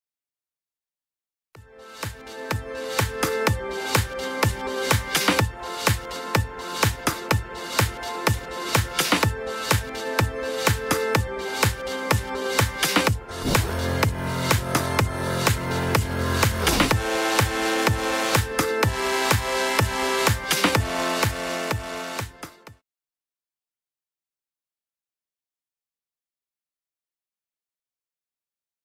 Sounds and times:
Music: 1.6s - 22.8s.

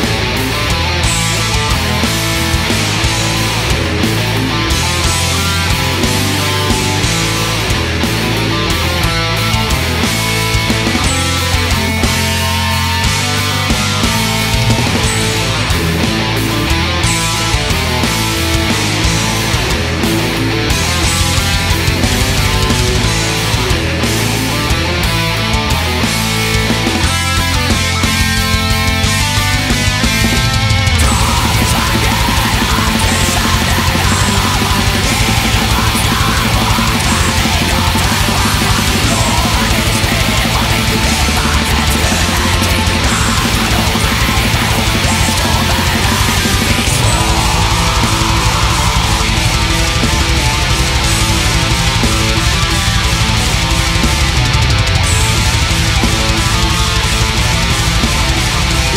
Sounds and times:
Grunge: 0.0s - 58.9s
Heavy metal: 0.0s - 58.9s.

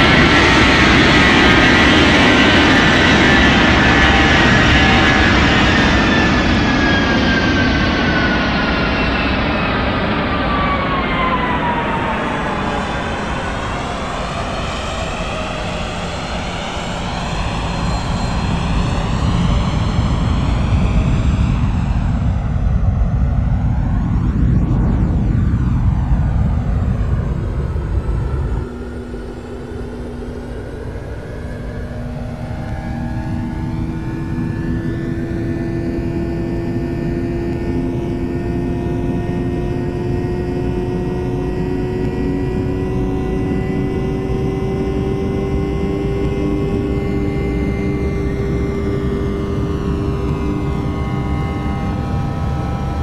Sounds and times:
Aircraft engine: 0.0s - 53.0s
Fixed-wing aircraft, airplane: 0.0s - 53.0s
Outside, rural or natural: 0.0s - 53.0s.

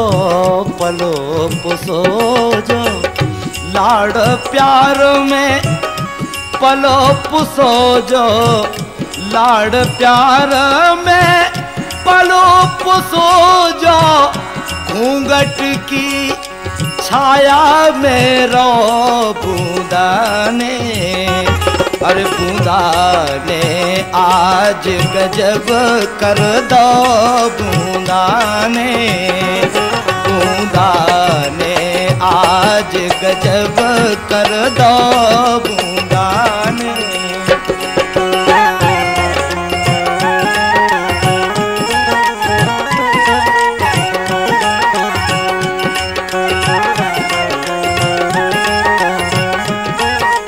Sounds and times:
Folk music: 0.0s - 50.4s.

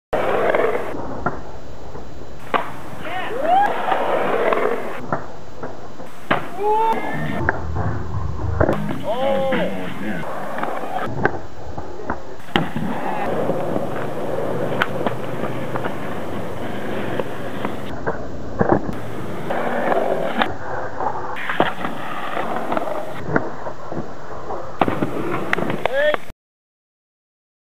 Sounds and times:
Skateboard: 0.2s - 1.5s, 2.4s - 7.6s, 8.6s - 26.3s
Music: 7.2s - 10.0s
Speech: 8.8s - 10.3s, 25.9s - 26.3s.

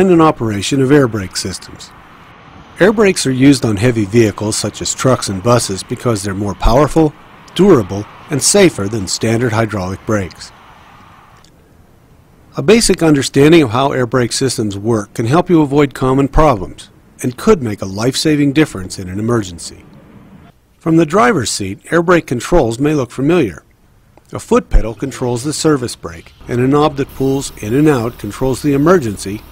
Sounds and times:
Speech: 0.0s - 1.9s, 2.8s - 10.6s, 12.6s - 19.8s, 20.8s - 23.7s, 24.3s - 29.5s.

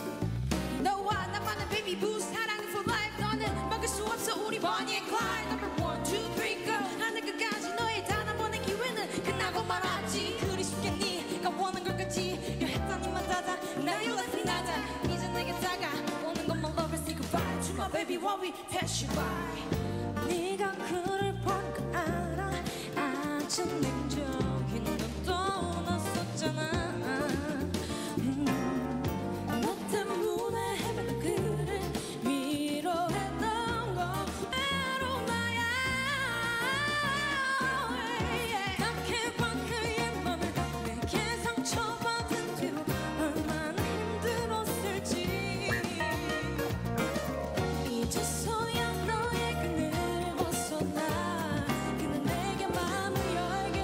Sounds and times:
Music: 0.0s - 53.8s.

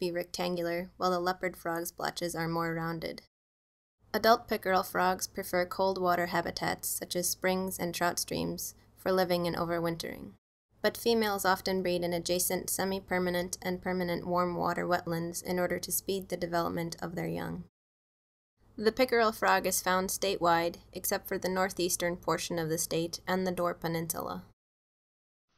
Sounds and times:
Speech: 0.0s - 3.3s, 4.2s - 17.7s, 18.8s - 24.6s.

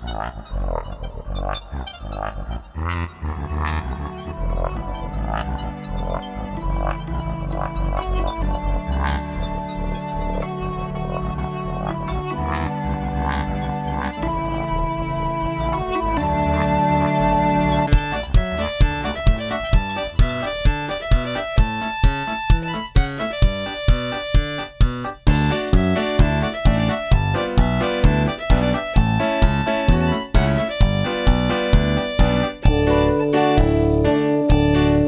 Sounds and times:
Music: 0.0s - 35.0s.

